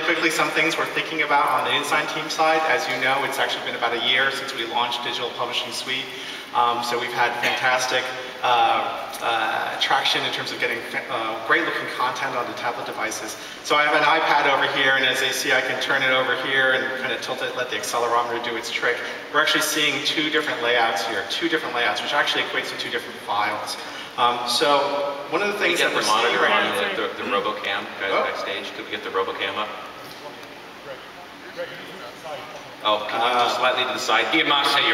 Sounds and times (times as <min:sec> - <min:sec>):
Speech: 0:00.0 - 0:34.9.